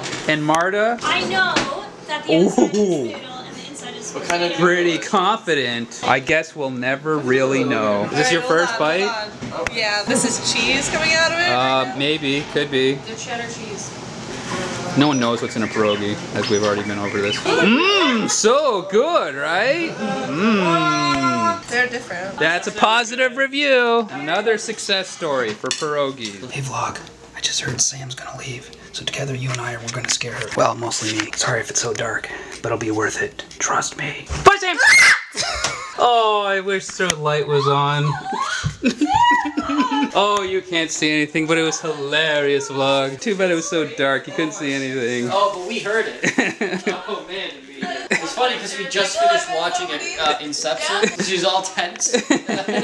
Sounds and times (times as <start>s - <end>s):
Screaming: 34.8s - 35.4s.